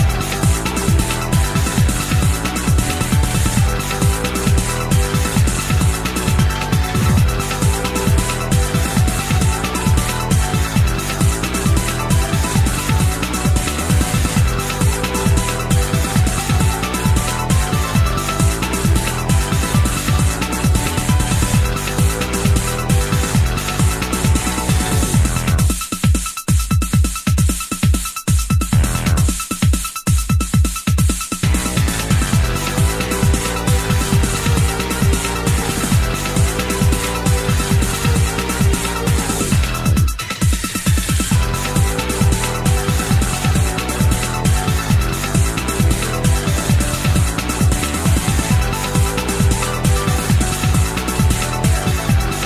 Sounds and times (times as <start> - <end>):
Music: 0.0 - 52.4.